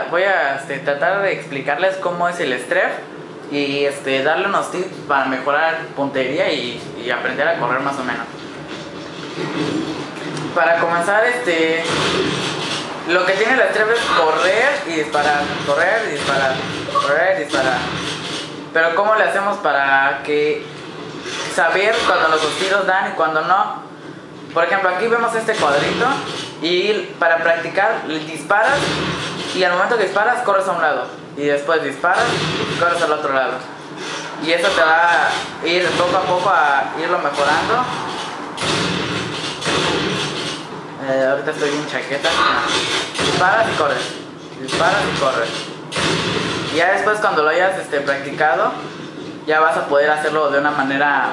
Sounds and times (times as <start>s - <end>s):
Speech: 0.0s - 8.3s, 10.4s - 12.0s, 13.1s - 17.9s, 18.8s - 20.7s, 21.4s - 23.8s, 24.5s - 28.9s, 29.5s - 33.7s, 34.4s - 38.0s, 41.0s - 45.6s, 46.7s - 48.8s, 49.5s - 51.3s.